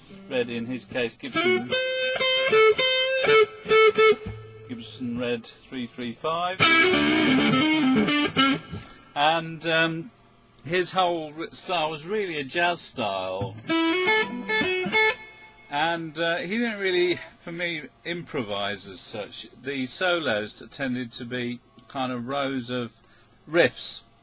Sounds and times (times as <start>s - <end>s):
Speech: 0.3s - 1.7s, 4.7s - 6.6s, 9.2s - 13.5s, 15.7s - 24.1s
Electric guitar: 1.3s - 4.8s, 6.6s - 9.1s, 13.4s - 15.7s.